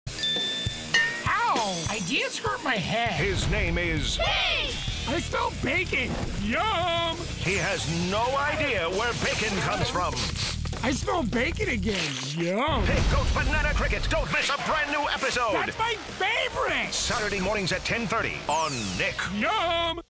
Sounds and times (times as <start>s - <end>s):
Music: 0.1s - 20.1s.